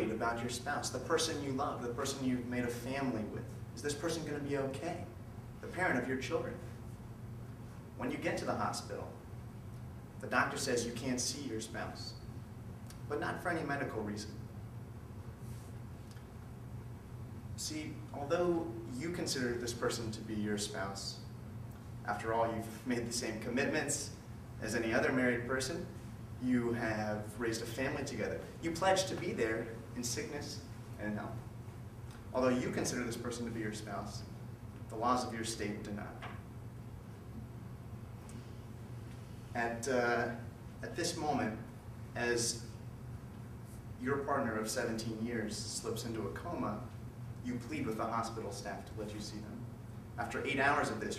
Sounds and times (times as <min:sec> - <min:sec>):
Male speech, man speaking: 0:00.0 - 0:06.6, 0:08.0 - 0:09.2, 0:10.2 - 0:12.2, 0:13.1 - 0:14.4, 0:17.6 - 0:21.3, 0:22.1 - 0:31.4, 0:32.4 - 0:34.3, 0:34.9 - 0:36.2, 0:39.6 - 0:42.7, 0:44.0 - 0:49.6, 0:50.2 - 0:51.1
Narration, monologue: 0:00.0 - 0:51.1.